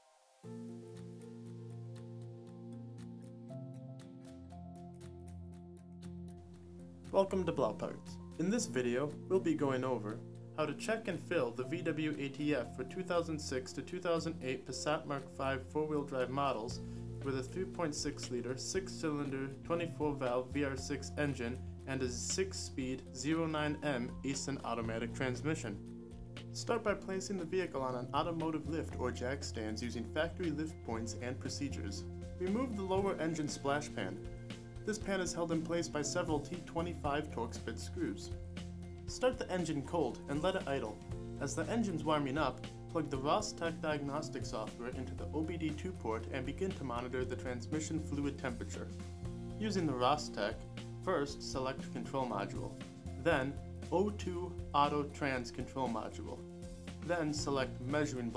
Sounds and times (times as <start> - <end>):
Music: 0.0 - 58.3
Speech: 7.2 - 25.8, 26.6 - 34.2, 34.9 - 38.3, 39.1 - 48.9, 49.6 - 56.4, 57.0 - 58.3.